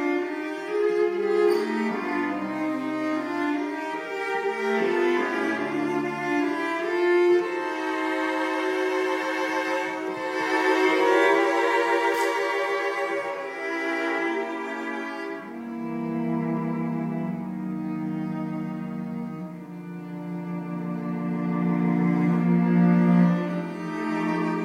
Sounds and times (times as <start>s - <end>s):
Cello: 0.0s - 24.6s
Classical music: 0.0s - 24.6s
Orchestra: 0.0s - 24.6s
Violin, fiddle: 0.0s - 24.6s.